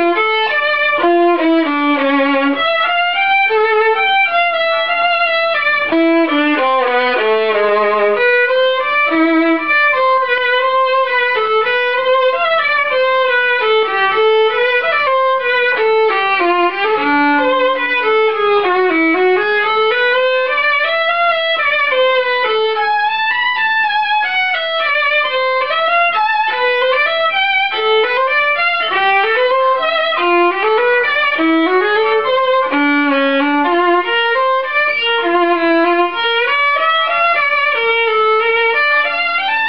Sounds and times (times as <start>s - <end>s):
Violin, fiddle: 0.0s - 39.6s.